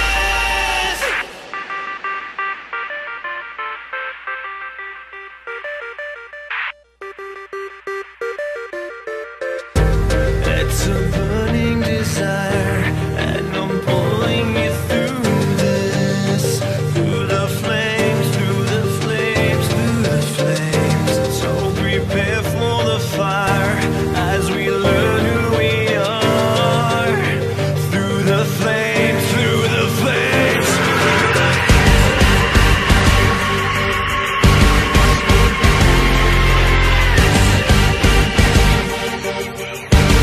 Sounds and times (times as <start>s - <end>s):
Music: 0.0s - 40.2s.